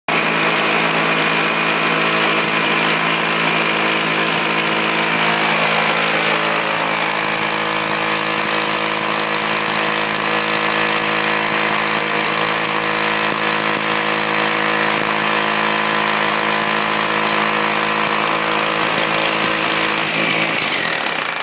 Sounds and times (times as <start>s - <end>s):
Jackhammer: 0.1s - 21.4s
Power tool: 0.1s - 21.4s.